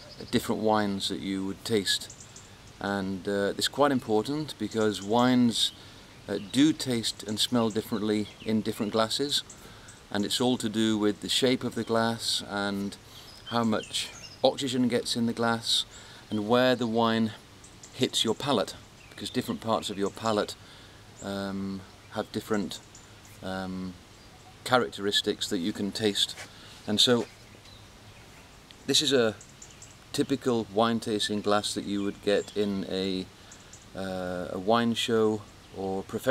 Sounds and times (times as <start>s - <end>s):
Speech: 0.1s - 2.1s, 2.8s - 9.4s, 10.1s - 17.4s, 18.0s - 20.6s, 21.2s - 22.8s, 23.4s - 24.0s, 24.6s - 27.3s, 28.9s - 29.4s, 30.1s - 33.3s, 34.0s - 36.3s.